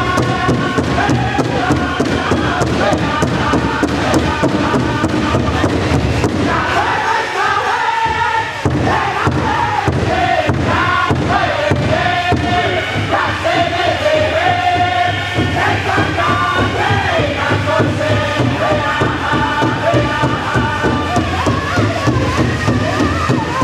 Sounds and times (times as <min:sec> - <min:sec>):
Music: 0:00.0 - 0:23.6.